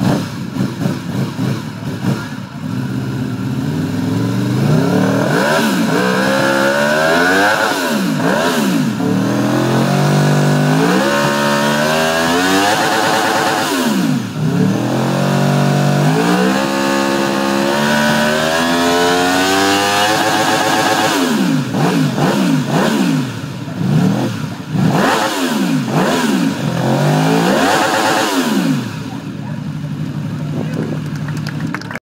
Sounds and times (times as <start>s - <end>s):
Speech: 29.0s - 31.1s
Applause: 31.0s - 32.0s.